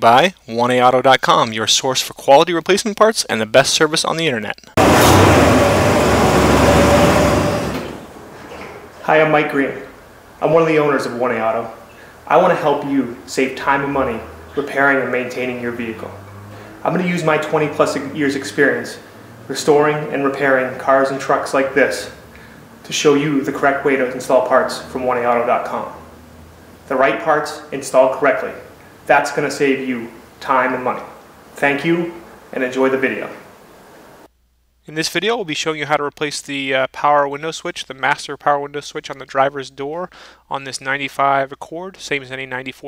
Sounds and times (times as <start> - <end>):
Speech: 0.0 - 4.8, 9.0 - 16.2, 16.8 - 22.2, 22.9 - 26.1, 26.9 - 33.4, 34.9 - 42.8.